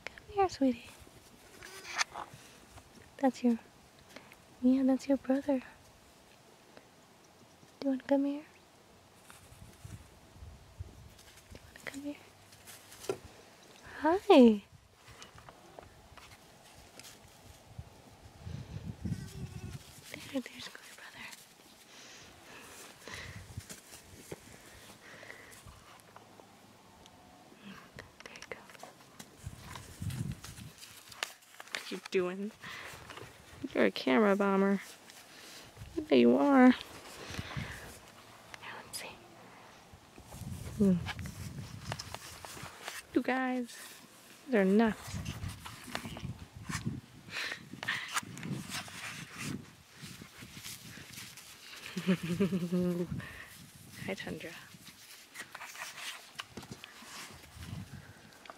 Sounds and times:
Whispering: 20.1 - 21.4, 27.6 - 28.8, 38.6 - 39.4
Speech: 33.6 - 34.8, 36.0 - 36.8, 44.5 - 45.0, 54.0 - 54.7.

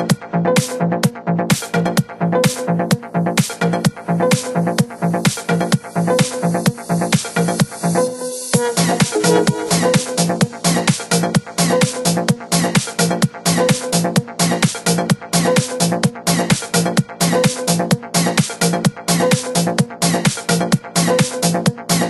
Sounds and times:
Music: 0.0 - 22.0.

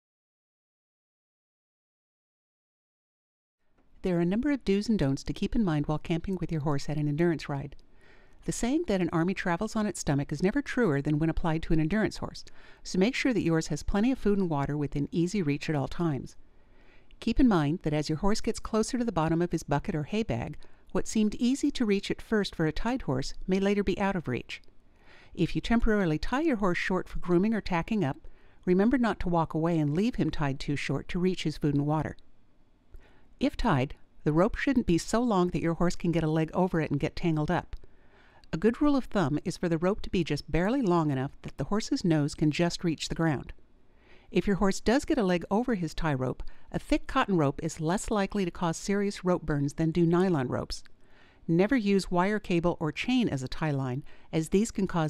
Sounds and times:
Speech: 4.0 - 7.8, 8.4 - 16.4, 17.2 - 24.6, 25.4 - 32.2, 33.4 - 37.8, 38.5 - 43.6, 44.3 - 50.9, 51.5 - 55.1.

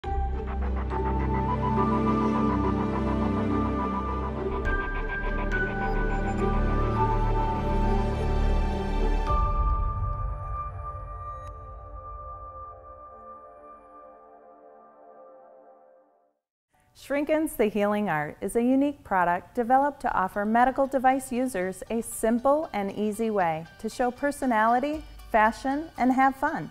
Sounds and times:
New-age music: 0.0 - 16.4, 20.7 - 26.7.

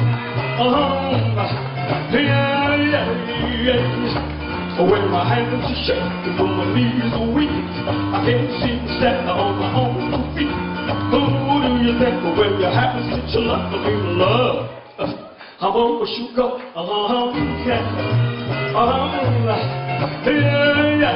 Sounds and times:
Music: 0.0 - 21.1
Male singing: 0.6 - 4.2, 4.8 - 21.1.

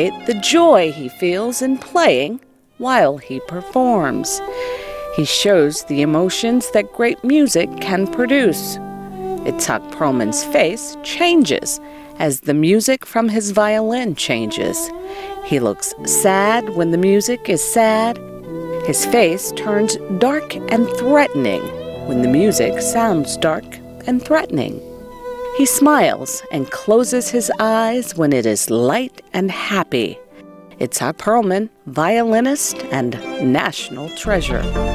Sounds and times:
Speech: 0.0 - 4.5, 5.2 - 8.8, 9.4 - 18.2, 18.9 - 24.8, 25.6 - 30.2, 30.8 - 34.8
Music: 0.0 - 34.9.

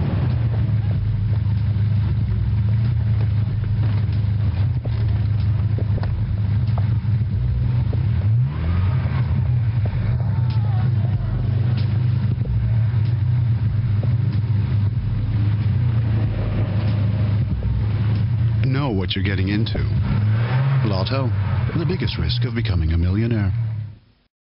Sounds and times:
Speech: 10.0 - 11.8, 18.6 - 20.1, 20.8 - 23.6.

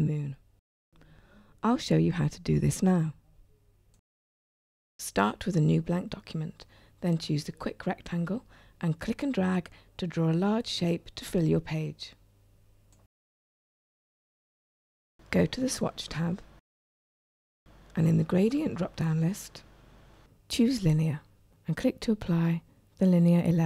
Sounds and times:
Speech: 1.6 - 3.2, 5.0 - 12.2, 15.3 - 16.5, 18.0 - 19.6, 20.5 - 23.6.

